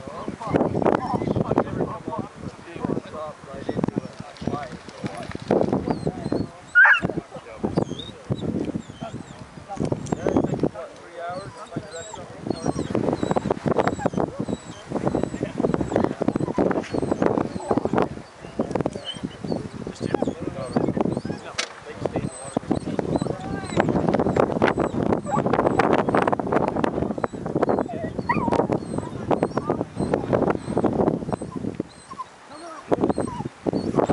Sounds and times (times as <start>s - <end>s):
Speech: 9.0s - 12.9s, 20.0s - 24.1s.